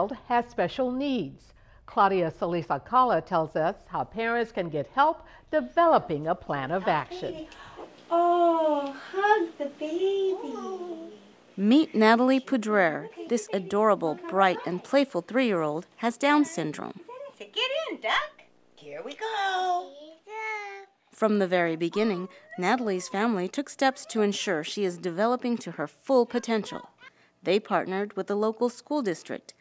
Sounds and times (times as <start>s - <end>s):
Child speech, kid speaking: 9.2s - 11.2s, 13.0s - 14.9s, 19.3s - 21.0s, 26.3s - 27.1s.